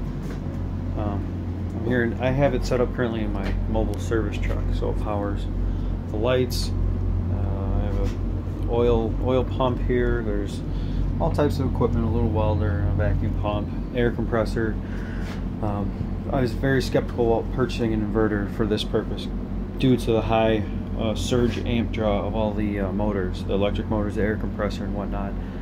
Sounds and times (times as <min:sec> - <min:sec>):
Speech: 0:01.0 - 0:14.8, 0:15.6 - 0:25.4.